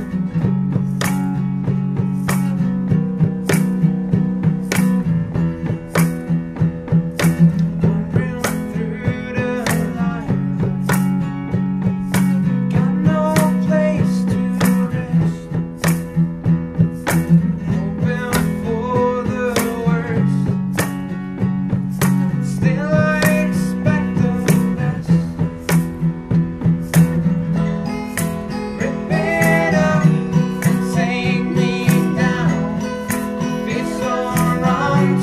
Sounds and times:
Music: 0:00.0 - 0:35.2.

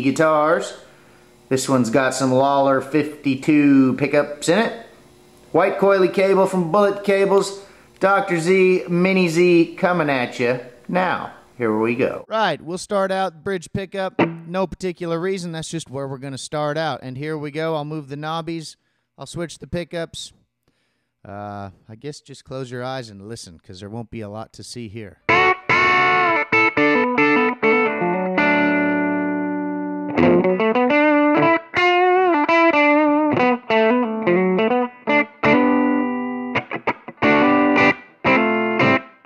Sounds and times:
Speech: 0:00.0 - 0:00.8, 0:01.5 - 0:04.9, 0:05.5 - 0:20.4, 0:21.2 - 0:25.2
Guitar: 0:00.0 - 0:12.2, 0:13.7 - 0:15.5, 0:25.2 - 0:39.2.

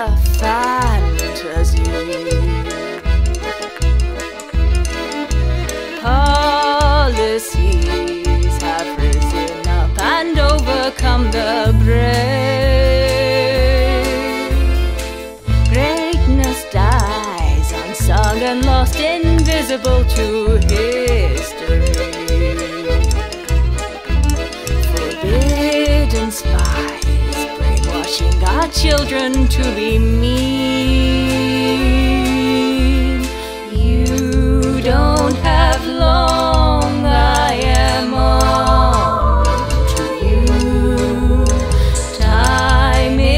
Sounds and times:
Violin, fiddle: 0:00.0 - 0:43.3.

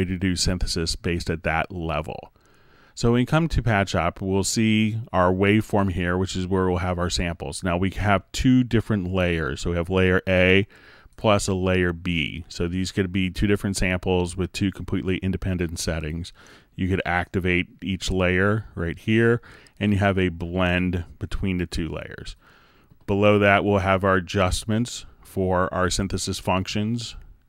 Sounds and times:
Speech: 0:00.0 - 0:02.4, 0:03.0 - 0:22.4, 0:23.1 - 0:27.3.

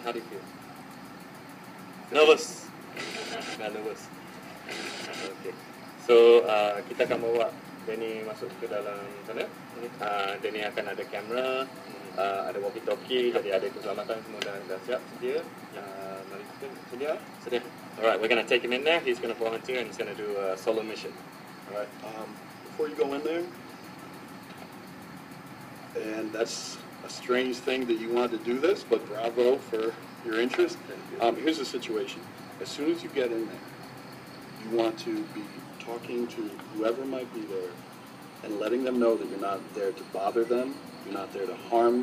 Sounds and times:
Speech: 0:00.0 - 0:00.5, 0:02.1 - 0:04.1, 0:05.1 - 0:23.5, 0:26.0 - 0:33.6, 0:34.6 - 0:37.8, 0:38.4 - 0:42.0.

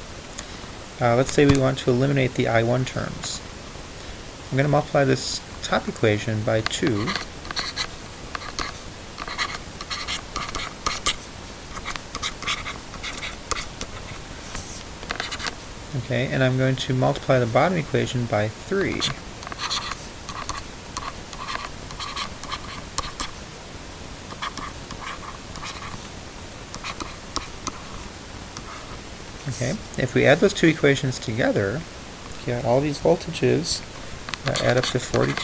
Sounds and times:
Inside, small room: 0:00.0 - 0:35.4
Speech: 0:01.0 - 0:03.4, 0:04.5 - 0:07.2, 0:16.0 - 0:19.2, 0:29.4 - 0:35.4.

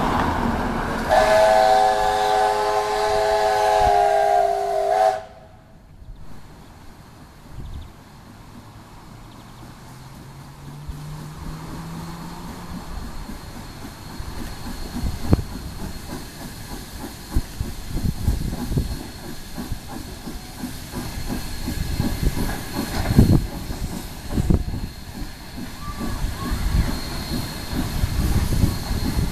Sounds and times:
Steam: 0:00.0 - 0:29.3
Steam whistle: 0:01.1 - 0:05.7.

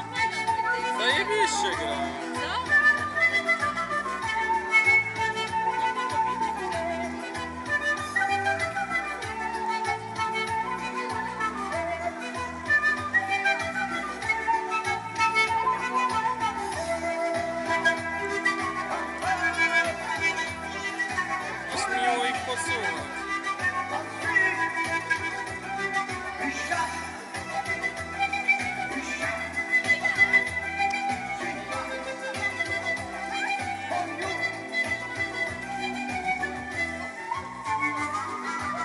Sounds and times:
Traditional music: 0:00.0 - 0:38.8.

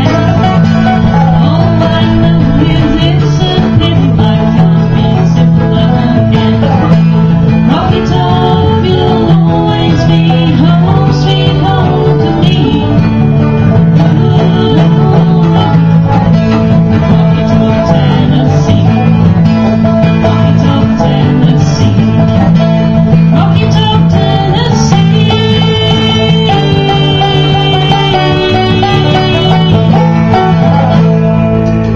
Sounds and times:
Banjo: 0:00.0 - 0:31.9
Guitar: 0:00.0 - 0:31.9
Traditional music: 0:00.0 - 0:31.9
Violin, fiddle: 0:00.0 - 0:31.9.

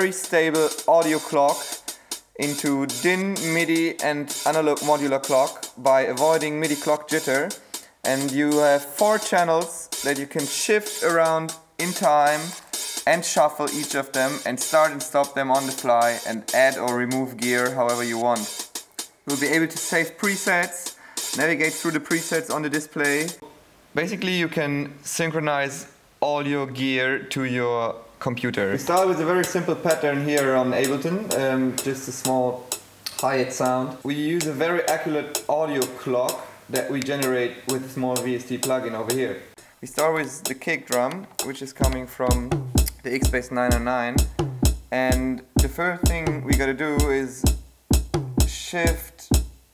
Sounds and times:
Speech: 0:00.0 - 0:01.8, 0:02.4 - 0:18.5, 0:19.3 - 0:44.3, 0:44.9 - 0:47.5, 0:48.4 - 0:49.3.

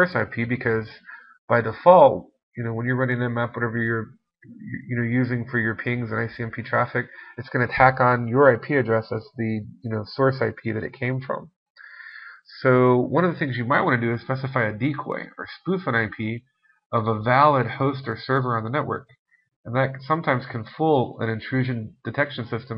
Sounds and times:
Speech: 0:00.0 - 0:16.4, 0:17.0 - 0:19.1, 0:19.7 - 0:22.7.

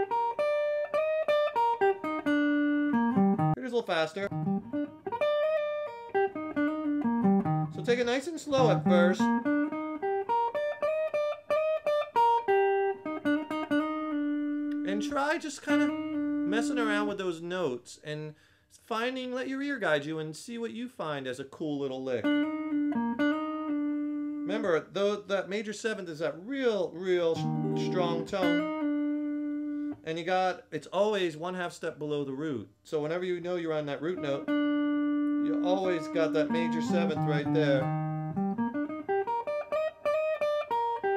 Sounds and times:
Guitar: 0:00.0 - 0:17.9, 0:21.8 - 0:31.3, 0:32.0 - 0:41.1
Inside, small room: 0:00.0 - 0:41.1
Speech: 0:03.6 - 0:04.3, 0:07.8 - 0:09.3, 0:14.8 - 0:22.3, 0:24.5 - 0:28.6, 0:30.0 - 0:34.5, 0:35.4 - 0:37.9.

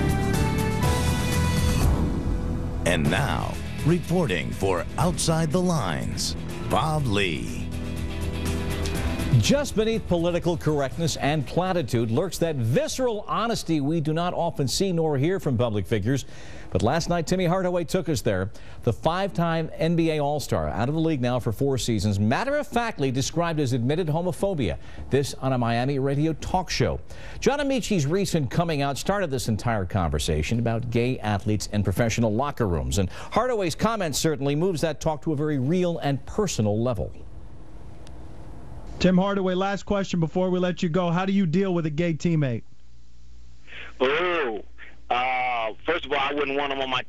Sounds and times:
Speech: 0:02.9 - 0:07.6, 0:09.4 - 0:16.2, 0:16.8 - 0:37.2, 0:39.0 - 0:42.6, 0:43.7 - 0:47.0.

